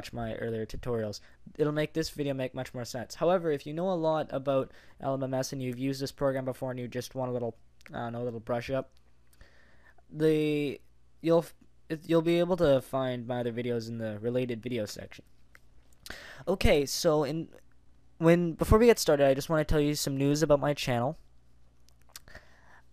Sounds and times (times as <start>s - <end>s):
Speech: 0.0s - 9.0s, 10.1s - 15.3s, 16.5s - 17.6s, 18.2s - 21.3s.